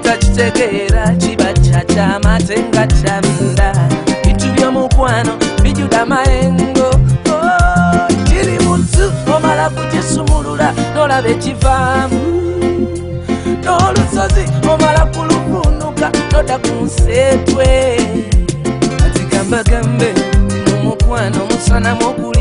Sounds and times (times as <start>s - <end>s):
Music: 0.0s - 22.4s.